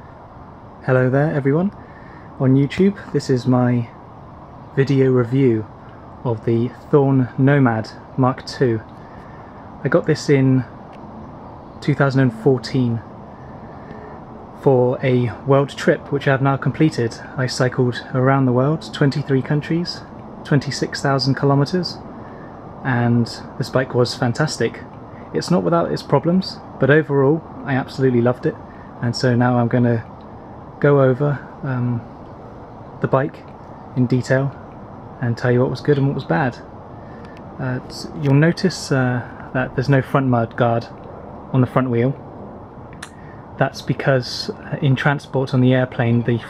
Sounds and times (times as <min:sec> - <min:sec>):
Speech: 0:00.8 - 0:01.8, 0:02.4 - 0:04.0, 0:04.7 - 0:08.9, 0:09.8 - 0:10.8, 0:11.8 - 0:13.1, 0:14.6 - 0:22.1, 0:22.8 - 0:30.2, 0:30.8 - 0:32.1, 0:33.0 - 0:36.7, 0:37.6 - 0:42.2, 0:43.0 - 0:46.4.